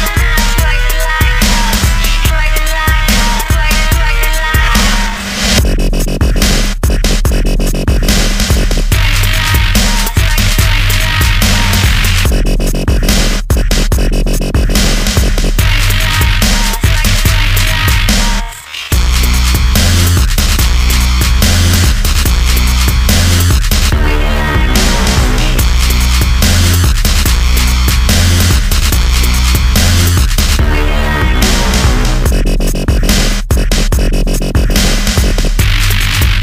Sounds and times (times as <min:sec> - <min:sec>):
Dubstep: 0:00.0 - 0:36.4.